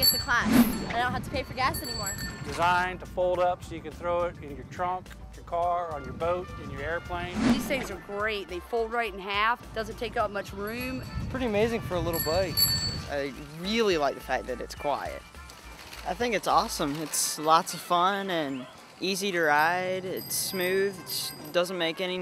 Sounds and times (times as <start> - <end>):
Bicycle: 0.0 - 3.0, 10.1 - 22.2
Music: 0.0 - 22.2.